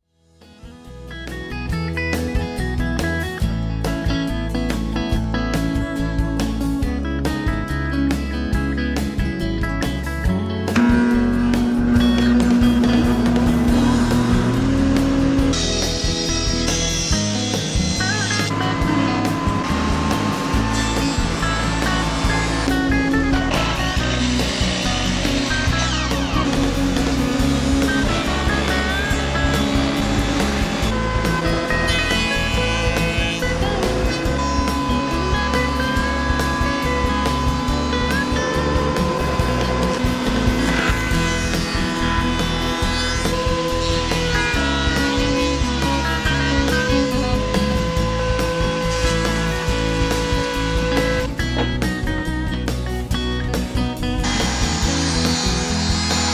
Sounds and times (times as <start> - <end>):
Music: 0.0 - 56.3.